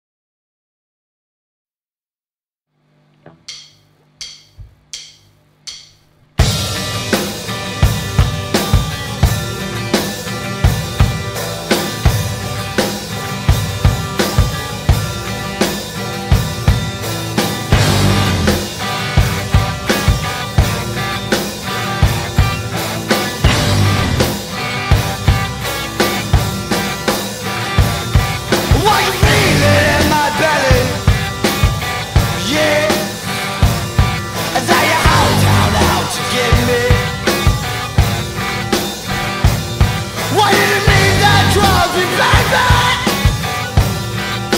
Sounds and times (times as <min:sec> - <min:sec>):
Music: 0:03.2 - 0:44.5.